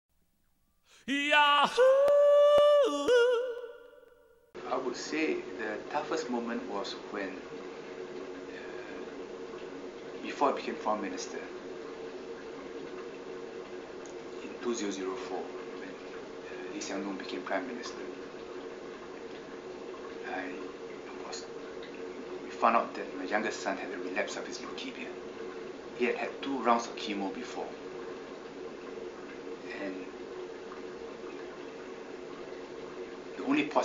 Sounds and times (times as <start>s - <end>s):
Speech: 1.1s - 3.6s, 4.7s - 7.4s, 10.2s - 11.5s, 14.4s - 15.5s, 16.7s - 18.1s, 22.5s - 25.2s, 26.0s - 27.8s, 29.7s - 30.1s, 33.4s - 33.8s.